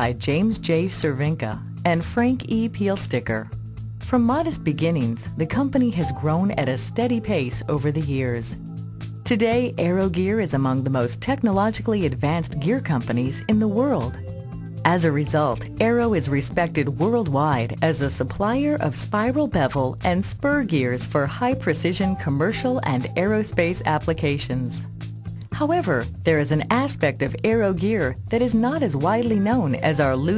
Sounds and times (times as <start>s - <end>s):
Speech: 0.0s - 3.5s, 4.1s - 8.6s, 9.3s - 14.2s, 14.8s - 24.9s, 25.5s - 30.3s
Music: 0.0s - 30.3s.